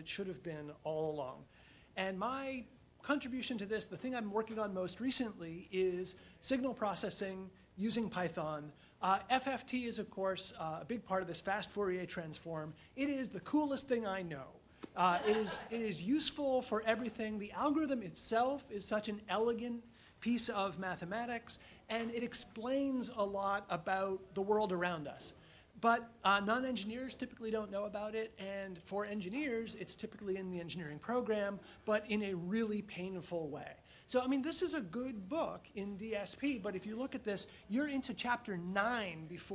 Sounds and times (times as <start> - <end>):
Speech: 0.0 - 39.5.